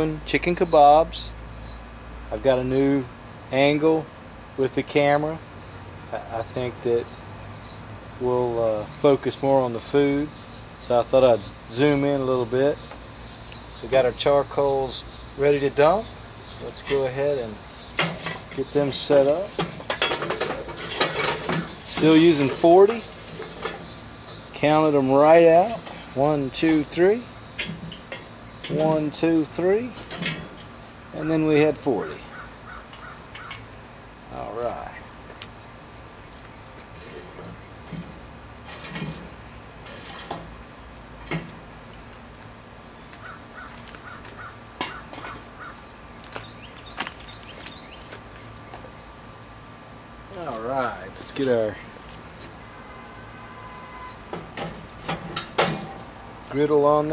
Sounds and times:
Speech: 0.0s - 1.4s, 2.3s - 5.4s, 6.1s - 7.1s, 8.2s - 12.8s, 13.8s - 17.6s, 18.6s - 19.5s, 21.9s - 23.1s, 24.6s - 27.3s, 28.7s - 30.0s, 31.1s - 32.3s, 34.3s - 35.1s, 50.3s - 51.9s, 56.4s - 57.1s.

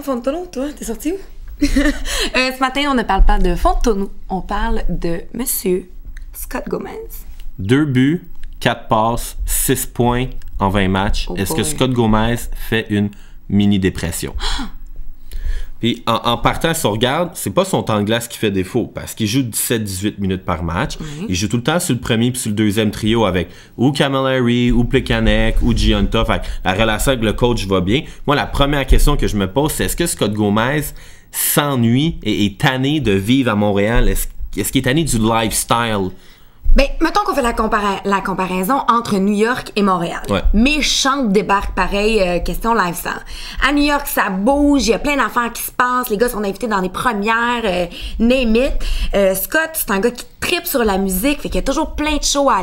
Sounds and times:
Speech: 6.6s - 14.2s, 15.9s - 30.9s.

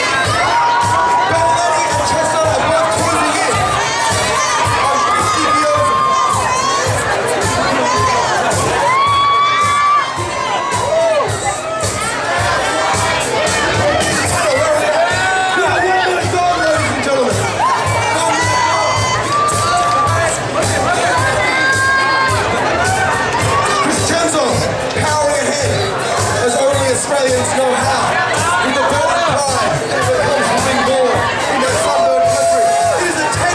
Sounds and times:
Inside, large room or hall: 0.0s - 33.5s
Music: 0.0s - 33.5s
Speech: 1.1s - 8.4s, 13.3s - 18.9s, 23.5s - 33.5s.

